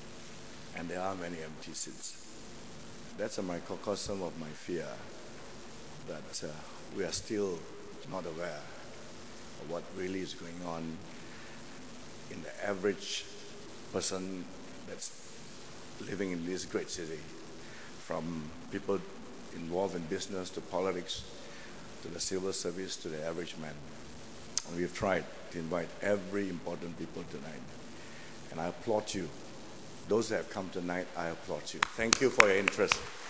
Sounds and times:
Narration, monologue: 0.0s - 33.3s
Male speech, man speaking: 0.7s - 2.3s, 3.2s - 5.1s, 6.1s - 8.8s, 9.6s - 11.0s, 12.3s - 15.2s, 16.0s - 17.3s, 18.0s - 21.3s, 22.0s - 23.8s, 24.6s - 27.7s, 28.5s - 29.4s, 30.1s - 33.1s.

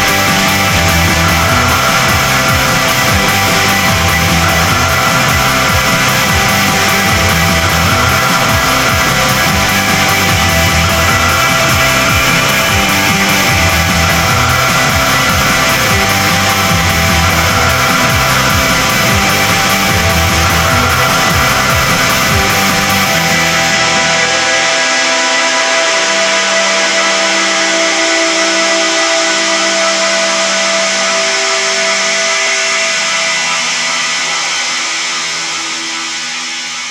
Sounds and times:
Music: 0.0s - 36.9s.

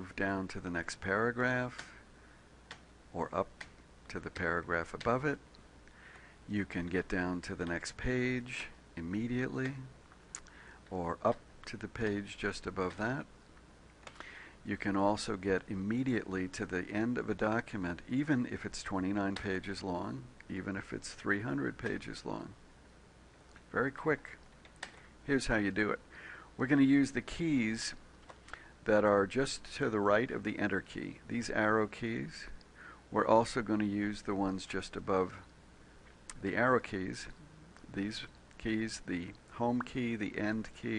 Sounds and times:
Speech: 0.0s - 2.0s, 3.1s - 5.4s, 6.5s - 10.0s, 10.9s - 13.3s, 14.6s - 22.6s, 23.7s - 24.4s, 25.2s - 26.0s, 26.6s - 28.0s, 28.8s - 35.5s, 36.3s - 40.9s.

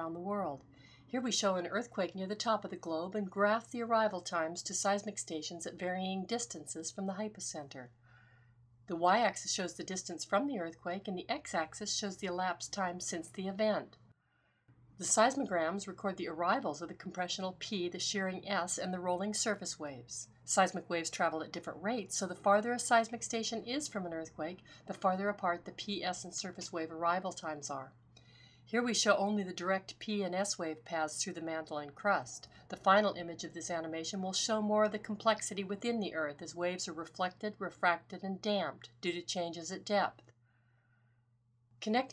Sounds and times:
Speech: 0.0s - 7.9s, 8.9s - 14.0s, 15.0s - 27.9s, 28.7s - 40.2s, 41.8s - 42.1s.

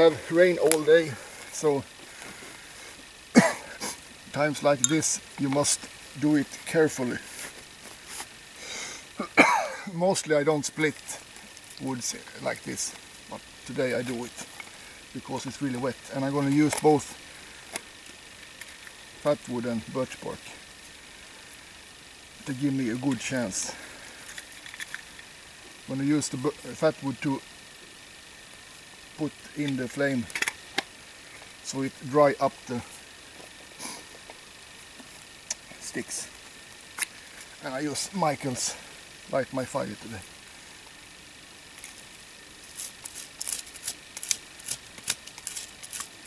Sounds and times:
Speech: 0.0s - 1.9s, 4.3s - 7.3s, 9.9s - 11.2s, 11.8s - 14.4s, 15.2s - 17.2s, 19.2s - 20.6s, 22.4s - 23.8s, 25.9s - 27.4s, 29.2s - 30.3s, 31.6s - 32.9s, 35.8s - 36.3s, 37.6s - 40.3s.

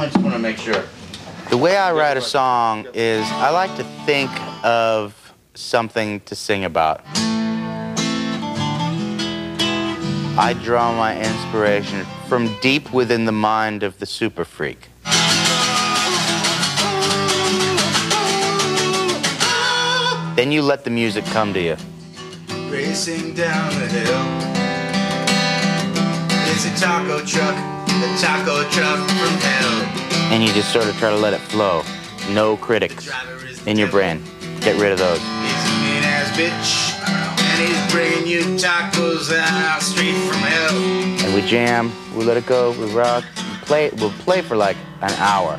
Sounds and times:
Speech: 0.0s - 0.9s, 1.5s - 7.0s, 10.4s - 14.9s, 20.4s - 21.8s, 30.3s - 35.2s, 41.2s - 45.5s
Music: 1.6s - 5.1s, 6.8s - 13.8s, 15.0s - 45.5s.

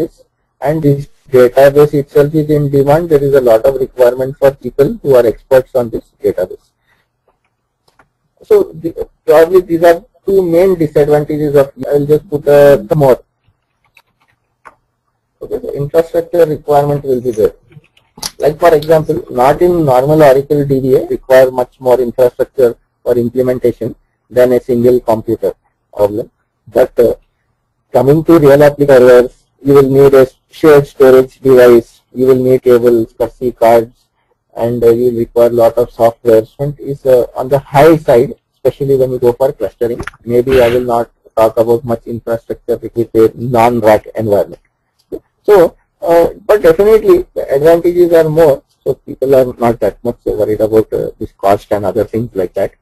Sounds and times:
Speech: 0.0s - 6.7s, 8.4s - 13.3s, 15.4s - 27.2s, 27.9s - 52.8s.

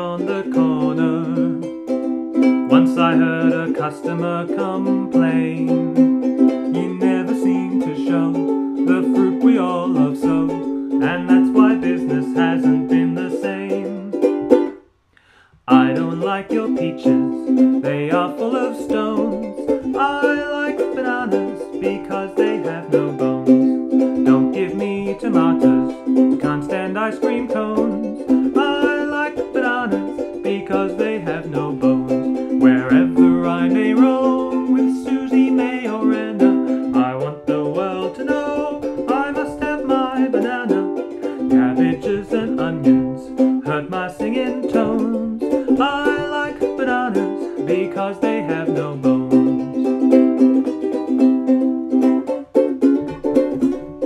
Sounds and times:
Ukulele: 0.0s - 54.0s.

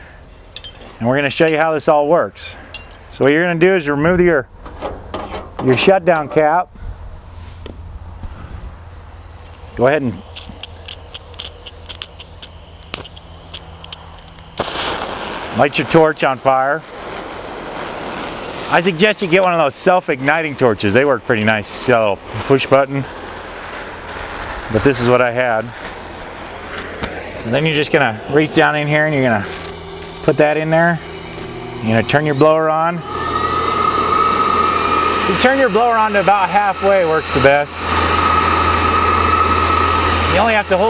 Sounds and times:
Speech: 1.0s - 4.5s, 5.6s - 6.7s, 9.8s - 10.2s, 15.6s - 16.8s, 18.7s - 23.1s, 24.7s - 25.8s, 27.4s - 29.5s, 30.2s - 31.0s, 31.8s - 33.0s, 35.3s - 37.8s, 40.3s - 40.8s.

